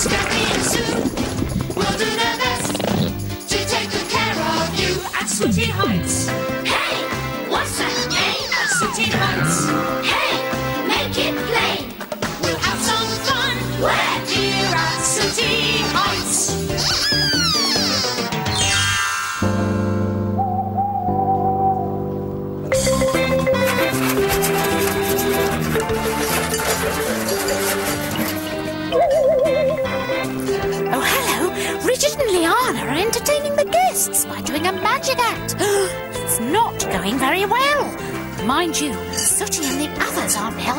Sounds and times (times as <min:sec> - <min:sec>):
Music: 0:00.0 - 0:40.7.